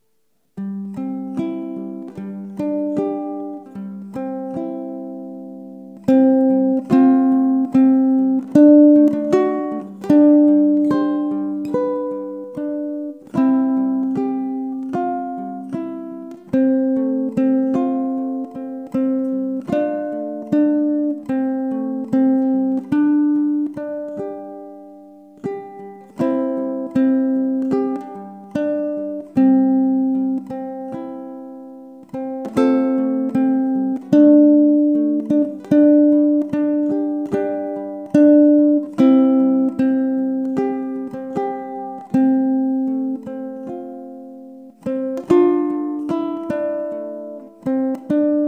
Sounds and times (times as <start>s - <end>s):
Ukulele: 0.0s - 48.4s.